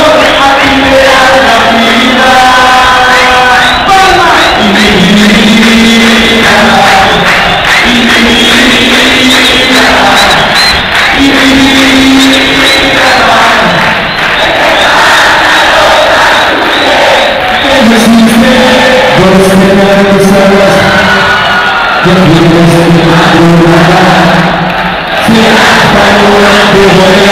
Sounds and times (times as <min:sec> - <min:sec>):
A capella: 0:00.0 - 0:20.9, 0:22.0 - 0:24.6, 0:25.2 - 0:27.3
Speech: 0:17.6 - 0:21.0, 0:22.0 - 0:24.4, 0:25.3 - 0:27.3.